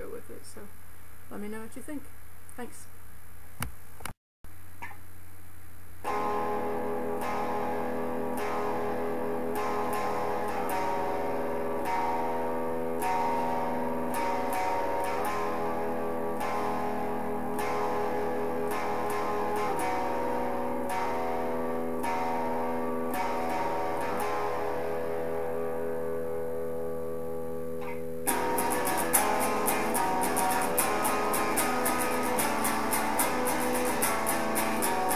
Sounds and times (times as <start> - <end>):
Electric guitar: 6.0 - 35.1
Strum: 6.1 - 35.1.